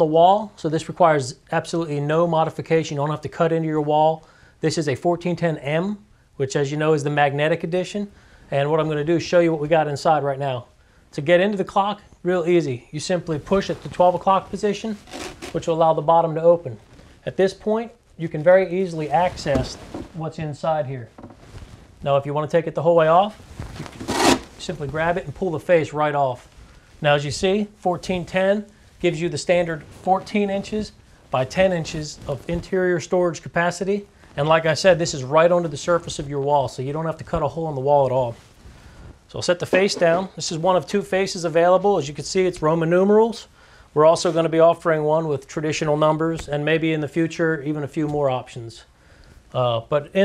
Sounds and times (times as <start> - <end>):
Speech: 0.0 - 21.1, 22.0 - 23.4, 24.6 - 38.4, 39.3 - 48.9, 49.5 - 50.2.